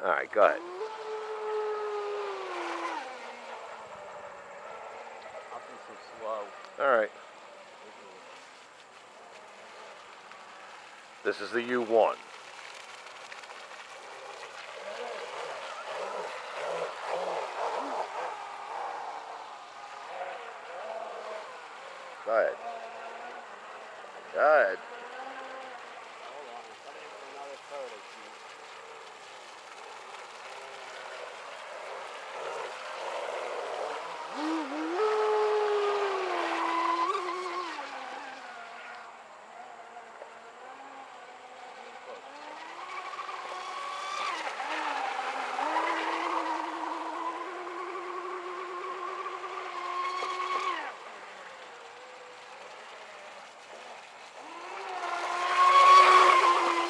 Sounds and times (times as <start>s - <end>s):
Motorboat, speedboat: 0.0s - 56.9s.